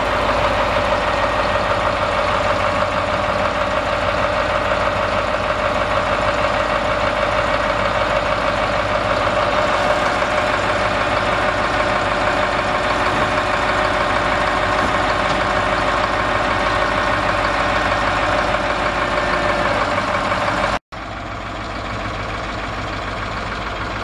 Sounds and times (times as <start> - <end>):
Vehicle: 0.0 - 24.0.